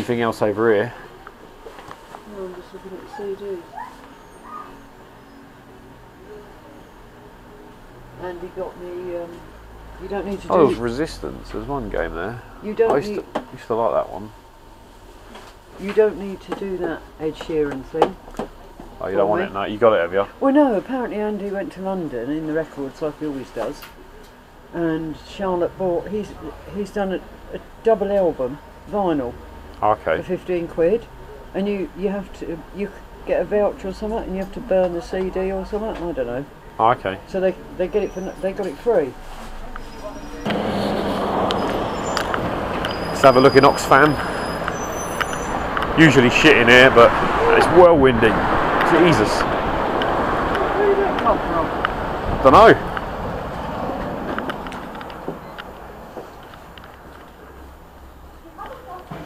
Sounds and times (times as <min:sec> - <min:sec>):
Outside, urban or manmade: 0:25.9 - 0:59.2.